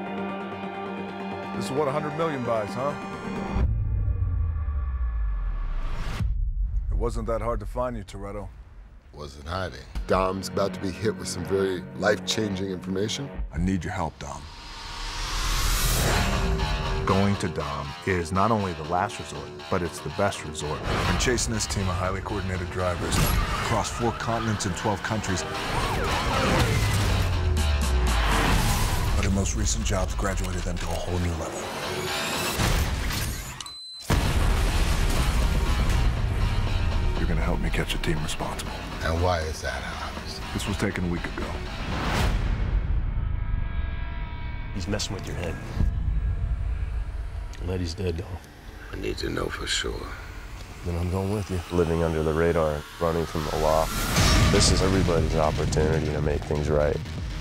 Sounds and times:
Music: 0.0 - 57.4
Speech: 6.9 - 8.5, 9.2 - 14.5, 17.1 - 26.8, 29.2 - 31.7, 37.2 - 41.6, 44.8 - 45.6, 47.6 - 50.2, 50.8 - 57.0.

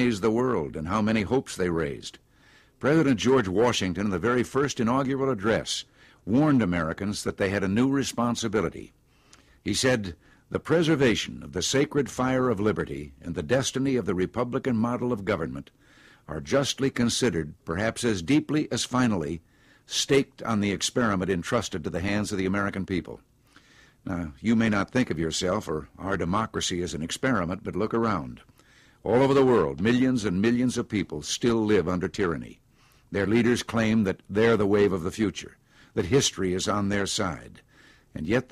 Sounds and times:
Speech: 0.0 - 2.2, 2.8 - 9.0, 9.6 - 23.2, 24.0 - 38.5.

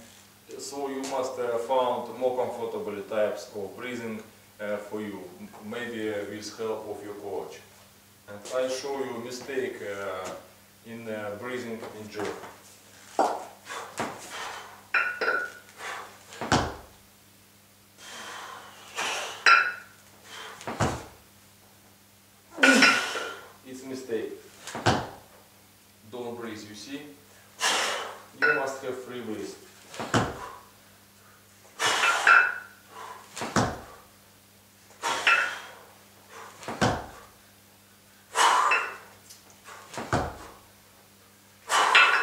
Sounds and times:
Speech: 0.5 - 7.7, 8.3 - 12.4, 23.7 - 24.4, 26.1 - 27.2, 28.4 - 29.6.

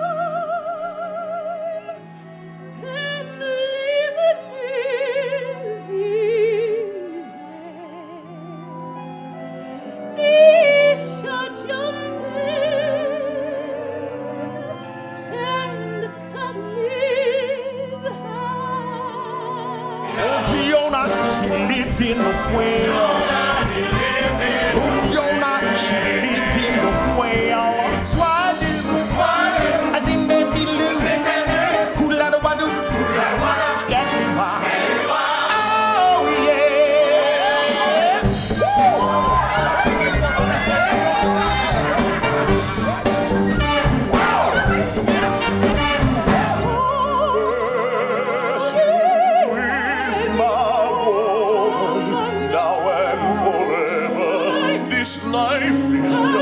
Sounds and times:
Music: 0.0 - 56.4.

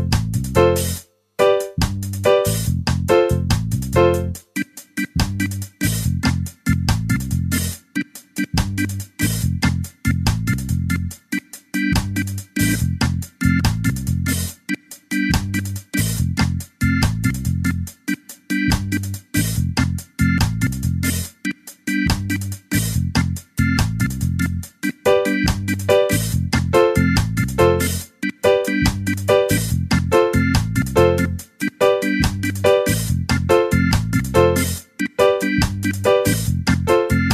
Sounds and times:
Music: 0.0 - 37.3.

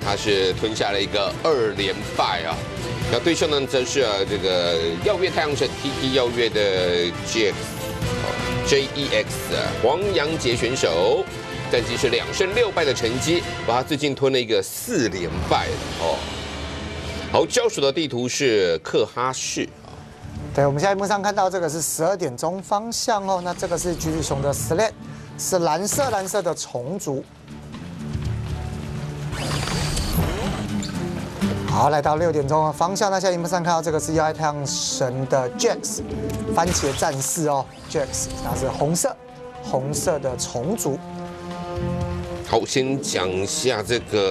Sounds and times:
Music: 0.0 - 44.3
Speech: 3.2 - 7.6, 8.7 - 16.2, 17.4 - 19.7, 20.6 - 27.2, 31.7 - 36.0, 36.6 - 41.0, 42.5 - 44.3.

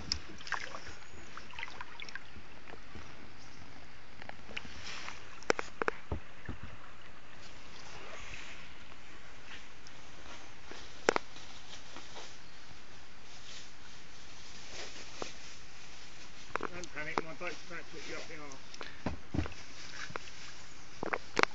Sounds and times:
Speech: 16.6 - 18.6.

